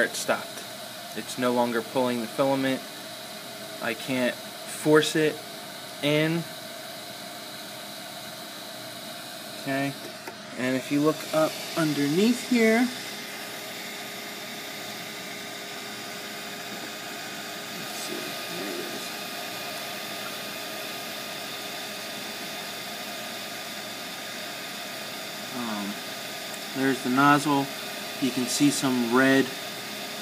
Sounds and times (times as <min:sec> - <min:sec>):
Speech: 0:00.0 - 0:00.6, 0:01.2 - 0:02.8, 0:03.8 - 0:05.4, 0:06.0 - 0:06.5, 0:09.6 - 0:10.0, 0:10.6 - 0:13.0, 0:17.8 - 0:19.1, 0:25.6 - 0:26.0, 0:26.8 - 0:29.6
Drill: 0:00.0 - 0:30.2.